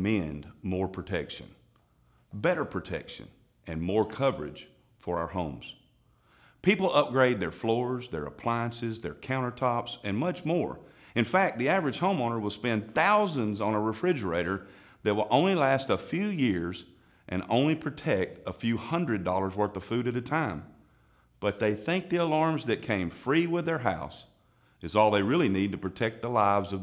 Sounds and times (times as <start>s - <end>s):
Speech: 0.0s - 1.6s, 2.4s - 5.8s, 6.6s - 20.7s, 21.4s - 26.8s.